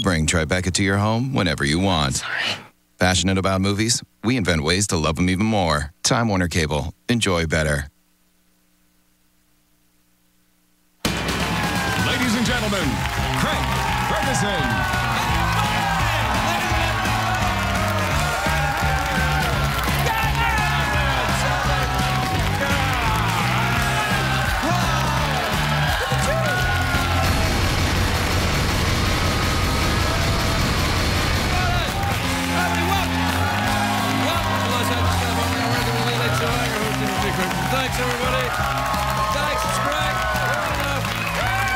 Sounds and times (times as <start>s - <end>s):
Speech: 0.0s - 2.2s, 3.0s - 8.0s, 12.0s - 14.7s
Music: 11.0s - 41.7s.